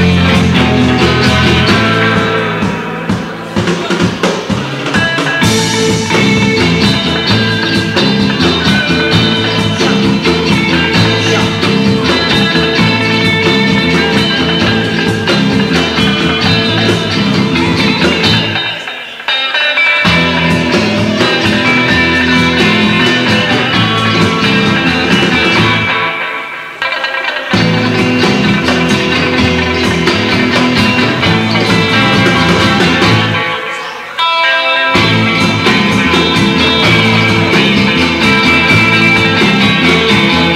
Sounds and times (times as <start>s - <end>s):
Music: 0.0s - 40.5s.